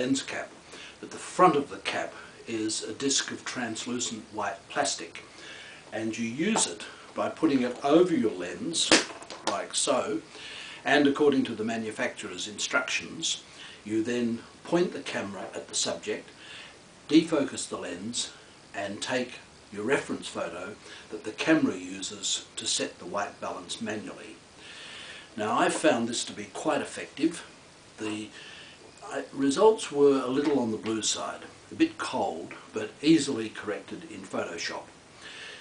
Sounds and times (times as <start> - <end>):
Speech: 0.0 - 5.3, 5.9 - 16.3, 17.1 - 24.4, 25.4 - 28.4, 29.0 - 34.9.